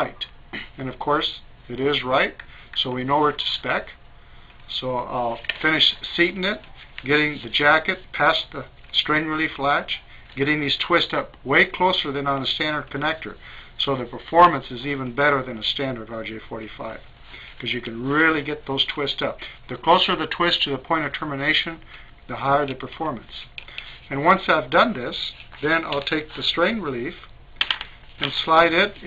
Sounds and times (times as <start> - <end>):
Speech: 0.0 - 4.0, 4.7 - 27.3, 28.2 - 29.0
Inside, small room: 0.0 - 29.0.